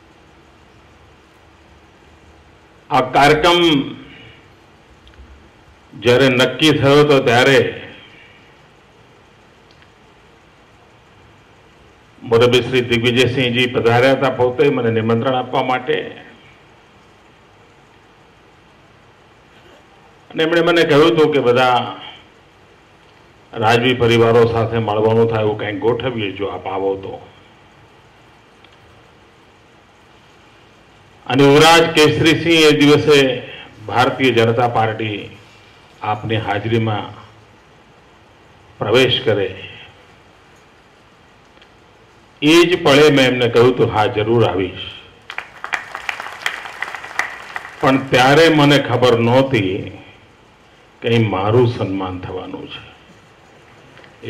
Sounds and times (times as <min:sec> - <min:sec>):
Narration, monologue: 0:00.0 - 0:45.4, 0:47.6 - 0:54.3
Male speech, man speaking: 0:02.9 - 0:04.1, 0:06.0 - 0:08.0, 0:12.2 - 0:16.4, 0:20.3 - 0:22.2, 0:23.6 - 0:27.3, 0:31.3 - 0:35.4, 0:36.0 - 0:37.3, 0:38.8 - 0:40.0, 0:42.4 - 0:45.1, 0:47.8 - 0:50.1, 0:51.0 - 0:53.0.